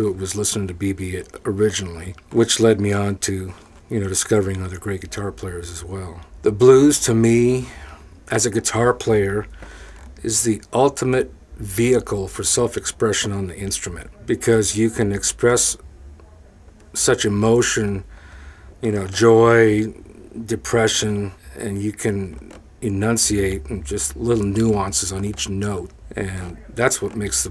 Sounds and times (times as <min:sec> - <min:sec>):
Speech: 0:00.0 - 0:18.1, 0:18.8 - 0:27.5.